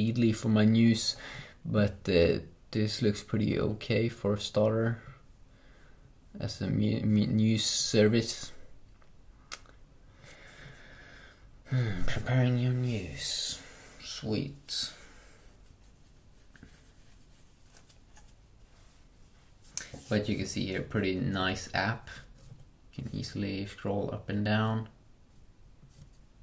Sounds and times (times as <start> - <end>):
Speech: 0.0 - 5.2, 6.4 - 8.6, 11.7 - 15.0, 20.1 - 22.3, 23.0 - 25.0
Inside, small room: 0.0 - 26.4.